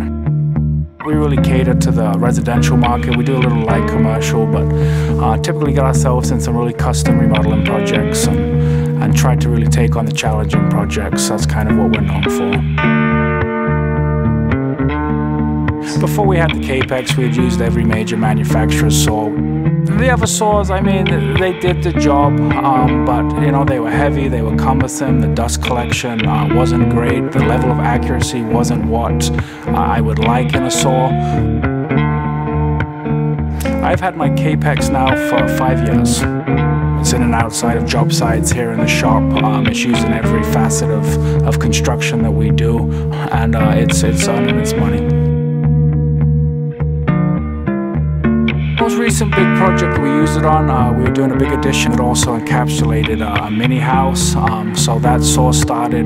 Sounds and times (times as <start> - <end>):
Music: 0.0 - 56.0
Speech: 1.0 - 12.8, 15.8 - 31.5, 33.6 - 36.3, 37.0 - 45.2, 48.8 - 56.0.